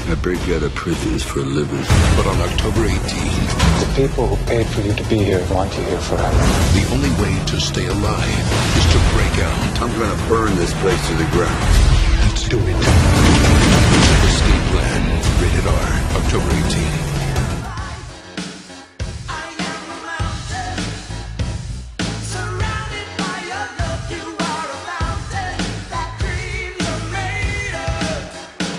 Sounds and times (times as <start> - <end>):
Speech: 0.0 - 13.0, 14.0 - 17.4
Music: 0.0 - 28.7.